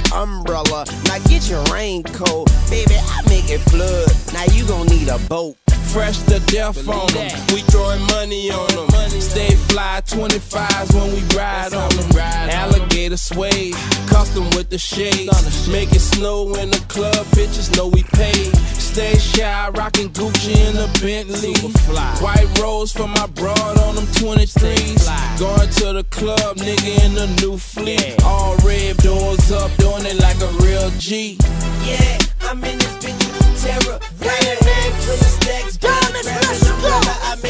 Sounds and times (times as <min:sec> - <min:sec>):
Music: 0:00.0 - 0:37.5.